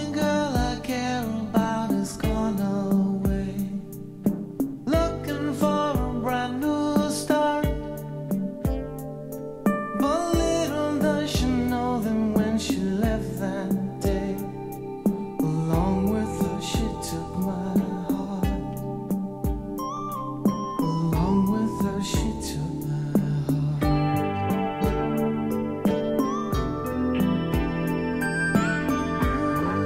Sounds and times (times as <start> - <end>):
Music: 0.0 - 29.8.